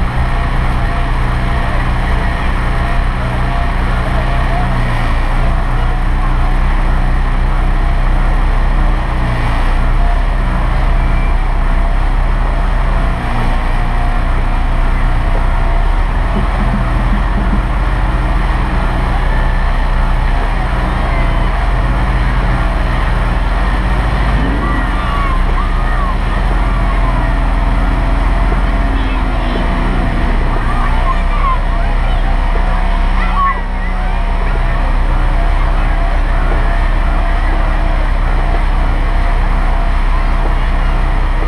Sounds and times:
Truck: 0.0 - 41.4
Speech: 16.3 - 41.4.

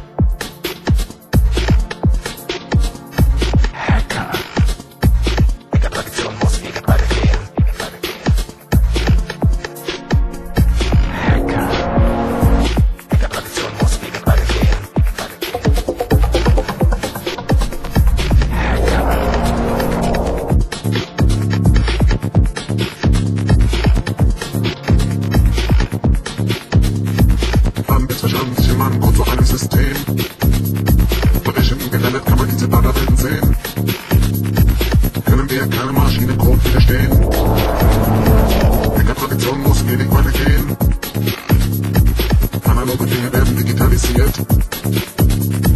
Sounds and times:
Music: 0.0 - 45.7.

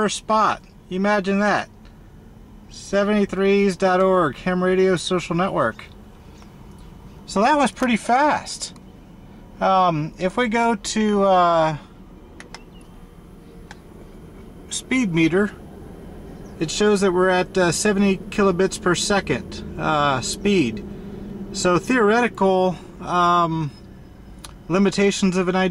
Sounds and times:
Speech: 0.0 - 1.8, 2.7 - 5.9, 7.3 - 8.8, 9.6 - 11.9, 14.7 - 15.6, 16.6 - 20.8, 21.6 - 23.8, 24.7 - 25.7.

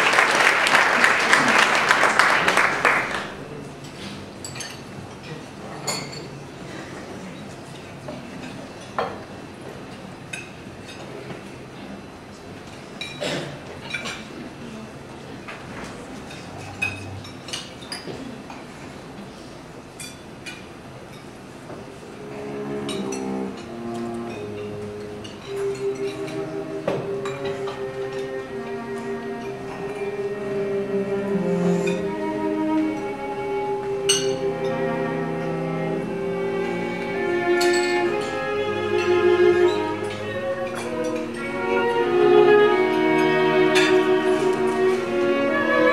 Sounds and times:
Music: 0.1 - 4.0, 22.2 - 45.9.

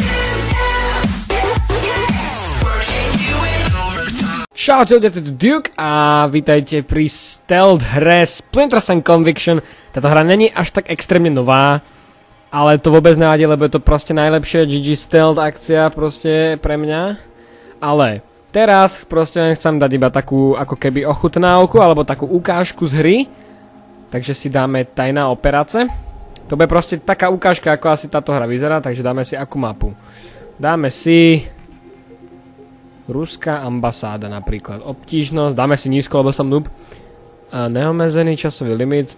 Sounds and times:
Speech: 4.5 - 11.8, 12.5 - 23.3, 24.1 - 30.0, 30.6 - 31.6, 33.1 - 36.8, 37.5 - 39.1.

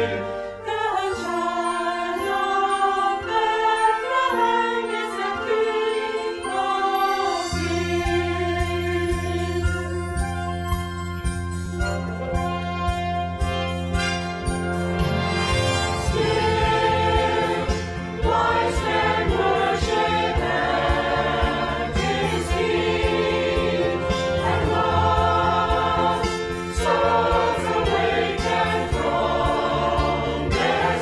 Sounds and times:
Choir: 0.0 - 10.3, 15.7 - 31.0.

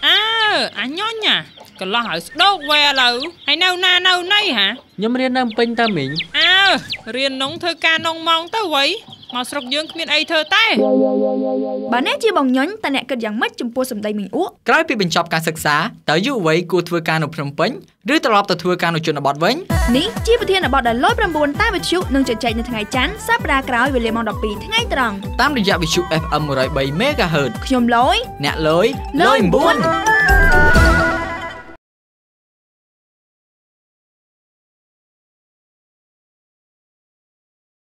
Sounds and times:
Speech: 0.0 - 10.8, 11.9 - 29.9
Music: 10.8 - 12.2, 19.7 - 31.8.

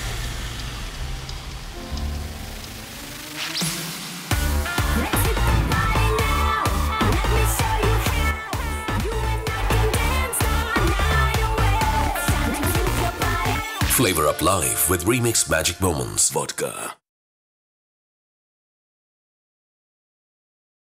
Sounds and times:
Music: 0.0 - 16.7
Speech: 13.8 - 17.0.

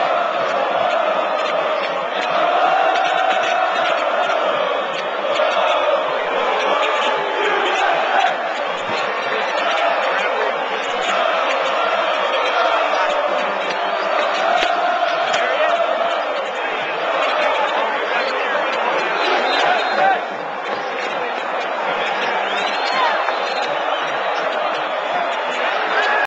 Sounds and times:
Crowd: 0.0 - 26.2
Speech: 0.0 - 26.2.

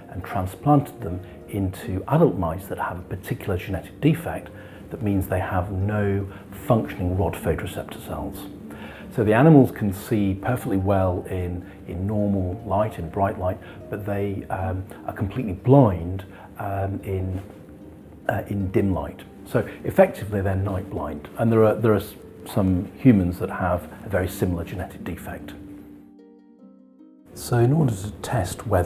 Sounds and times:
Speech: 0.0 - 17.6, 18.3 - 25.6, 27.4 - 28.8
Music: 0.0 - 28.8.

